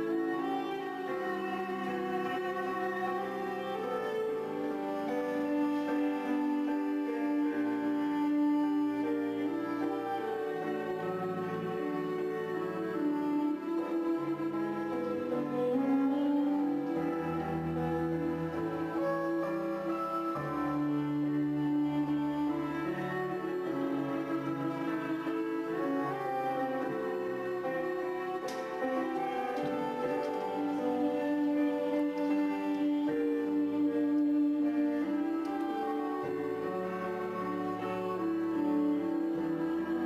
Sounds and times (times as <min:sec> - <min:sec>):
Music: 0:00.0 - 0:40.0.